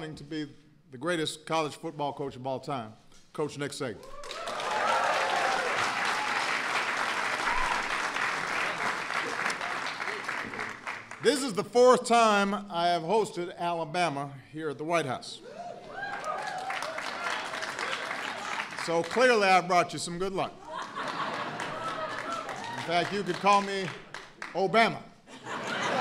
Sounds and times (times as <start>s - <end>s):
Speech: 0.0s - 4.0s, 11.2s - 15.4s, 18.8s - 20.6s, 22.8s - 24.0s, 24.6s - 25.1s
Applause: 4.0s - 11.3s, 15.9s - 19.6s, 20.8s - 24.7s, 25.7s - 26.0s.